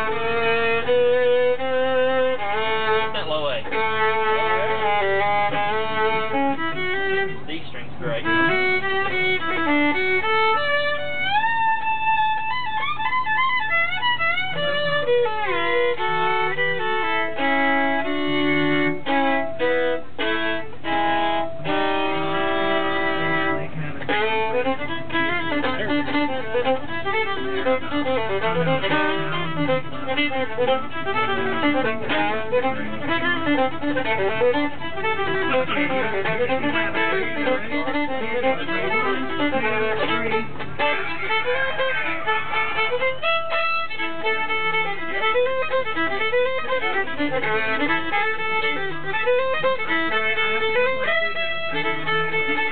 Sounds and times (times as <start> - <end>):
Violin, fiddle: 0.0 - 52.7.